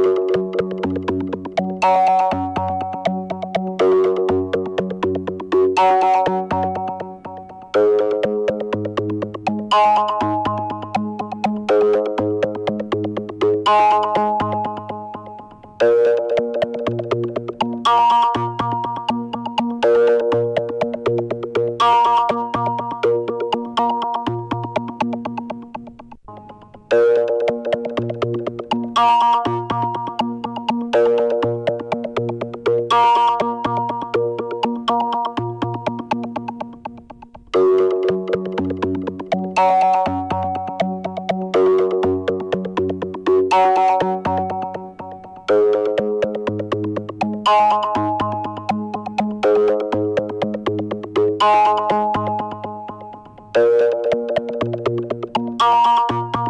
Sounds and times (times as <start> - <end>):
Synthesizer: 0.0 - 56.4.